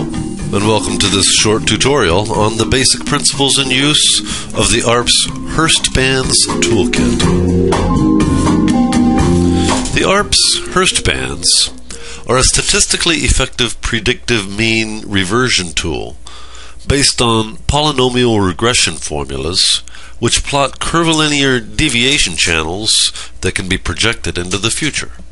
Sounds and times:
Music: 0:00.0 - 0:12.6
Speech: 0:00.5 - 0:07.4, 0:10.0 - 0:16.2, 0:16.9 - 0:25.2.

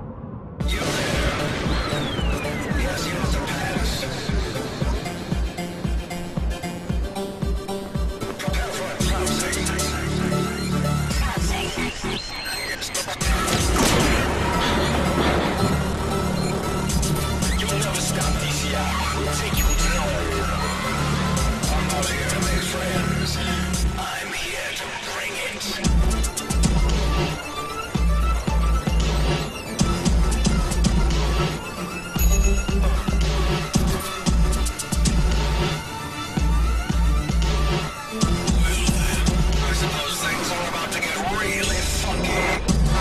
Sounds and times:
Music: 0:00.0 - 0:43.0.

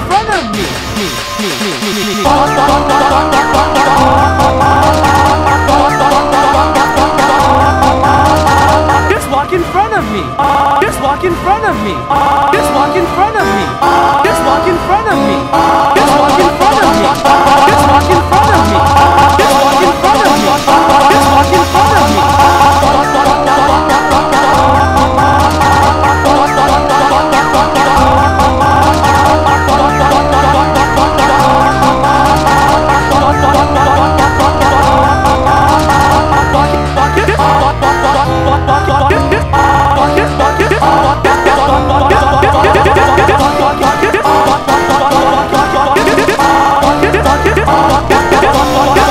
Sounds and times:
Speech: 0:00.0 - 0:01.2, 0:09.0 - 0:15.4
Music: 0:00.0 - 0:49.1.

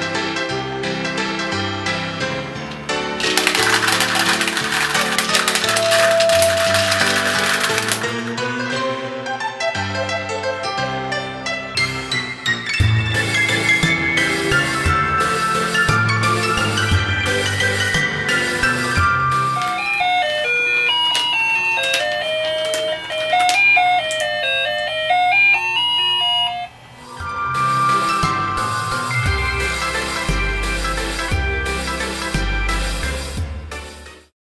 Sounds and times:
Music: 0:00.0 - 0:34.3.

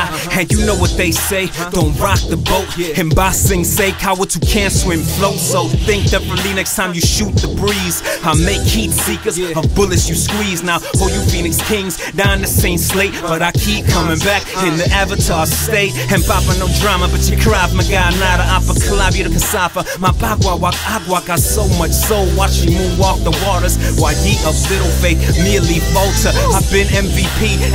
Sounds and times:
Rhythm and blues: 0:00.0 - 0:27.7.

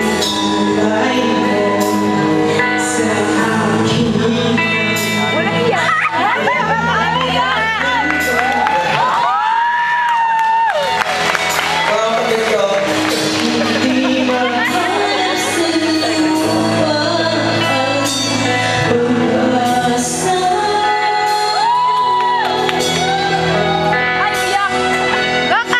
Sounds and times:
Female singing: 0:00.0 - 0:08.8, 0:13.3 - 0:24.8
Male singing: 0:00.0 - 0:09.1, 0:11.9 - 0:21.8
Music: 0:00.0 - 0:25.7.

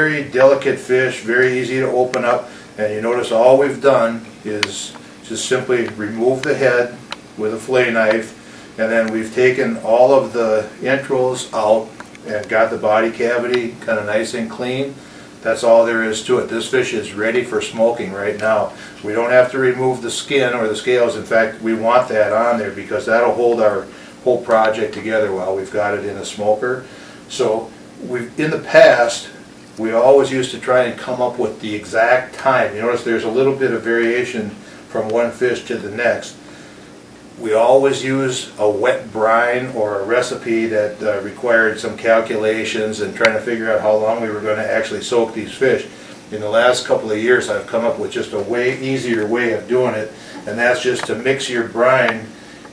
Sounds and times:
Speech: 0:00.0 - 0:36.4, 0:37.4 - 0:52.4.

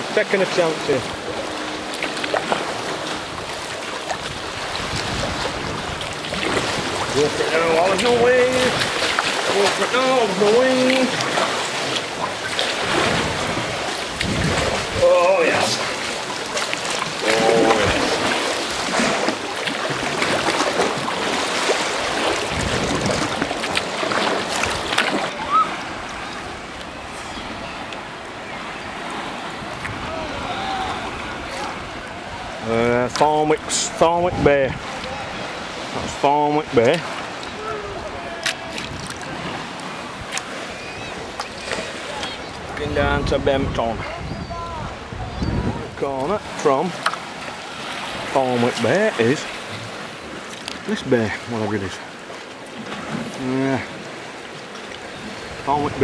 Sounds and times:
Boat, Water vehicle: 0:00.0 - 0:56.0.

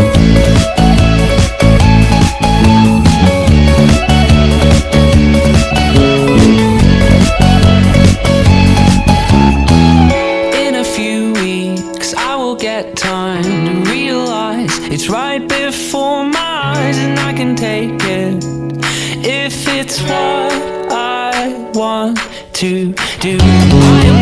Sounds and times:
Music: 0:00.0 - 0:24.2.

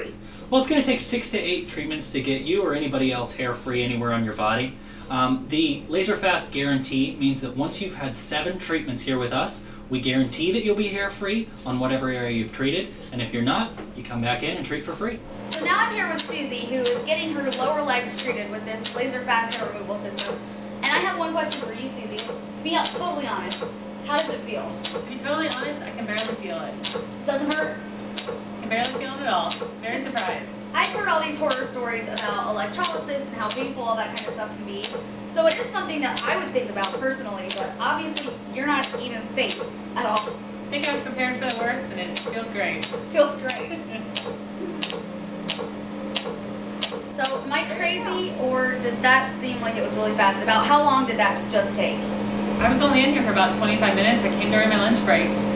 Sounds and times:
Speech: 0:00.0 - 0:27.8, 0:28.6 - 0:44.0, 0:47.2 - 0:52.0, 0:52.6 - 0:55.4.

